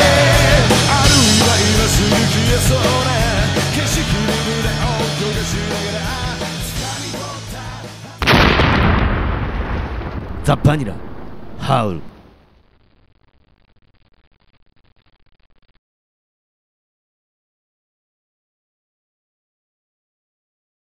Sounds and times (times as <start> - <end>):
Music: 0.0 - 8.2
Speech: 10.4 - 11.0, 11.6 - 12.1.